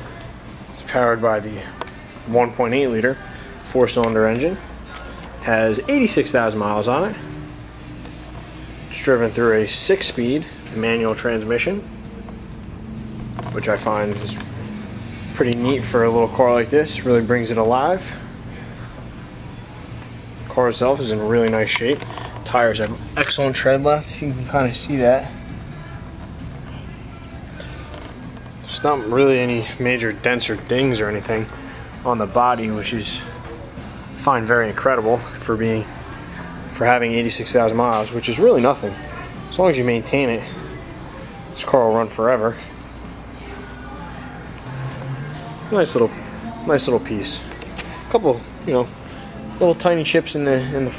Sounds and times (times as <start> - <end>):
Music: 0.0 - 50.9
Speech: 0.8 - 4.6, 5.4 - 7.2, 8.9 - 11.9, 13.5 - 14.5, 15.4 - 18.2, 20.5 - 25.4, 28.7 - 33.4, 34.2 - 35.9, 36.7 - 40.6, 41.6 - 42.7, 45.7 - 47.5, 48.1 - 48.9, 49.6 - 50.9.